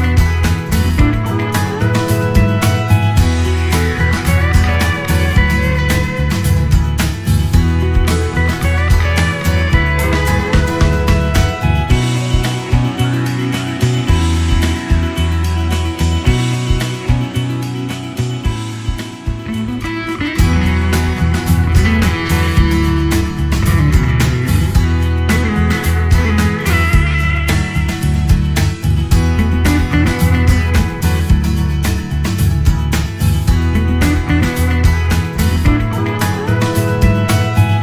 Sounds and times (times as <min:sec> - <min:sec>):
Music: 0:00.0 - 0:37.8.